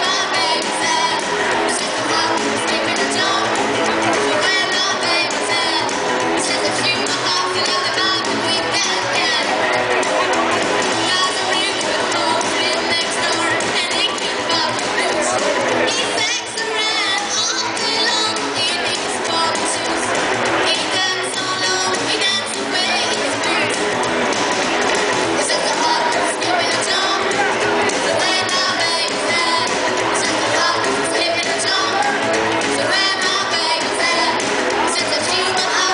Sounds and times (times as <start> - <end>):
Inside, public space: 0.0 - 35.9
Speech: 0.0 - 35.9.